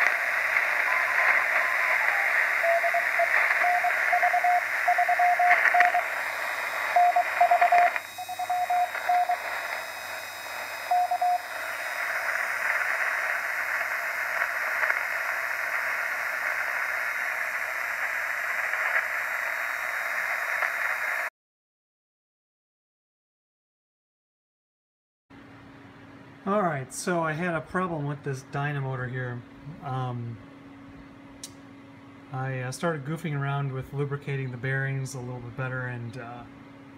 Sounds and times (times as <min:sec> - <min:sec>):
Radio: 0:00.0 - 0:21.3.